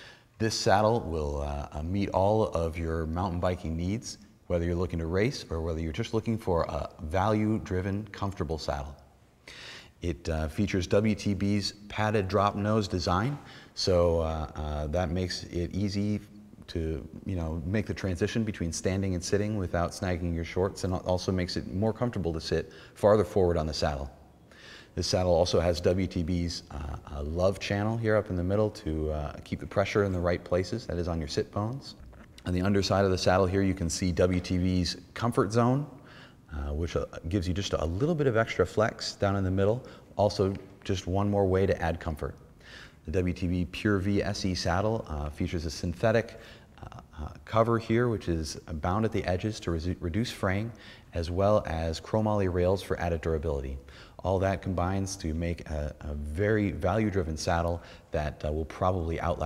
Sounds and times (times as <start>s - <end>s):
Speech: 0.4s - 9.1s, 10.0s - 24.2s, 24.9s - 59.4s.